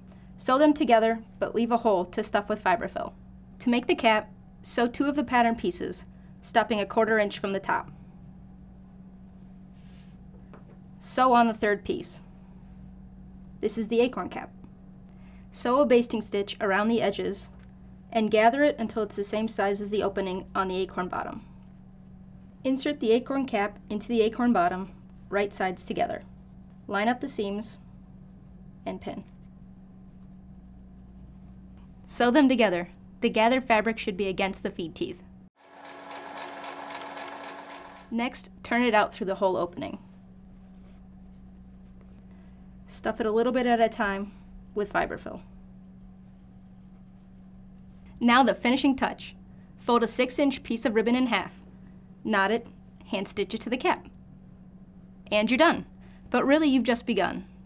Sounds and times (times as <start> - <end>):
Sewing machine: 35.6 - 38.2.